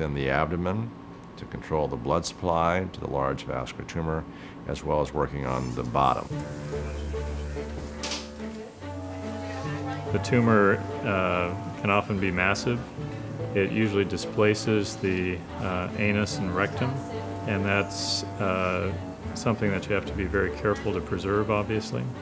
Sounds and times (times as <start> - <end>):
Speech: 0.0 - 6.3, 13.6 - 22.2.